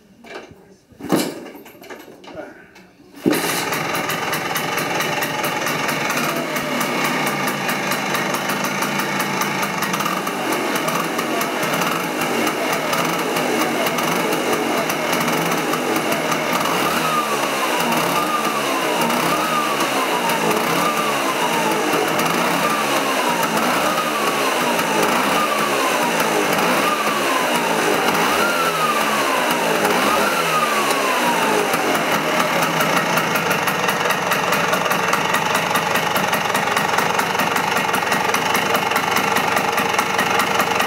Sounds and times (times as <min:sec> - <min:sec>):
Vehicle: 0:03.2 - 0:40.8
Accelerating, revving, vroom: 0:10.0 - 0:32.8.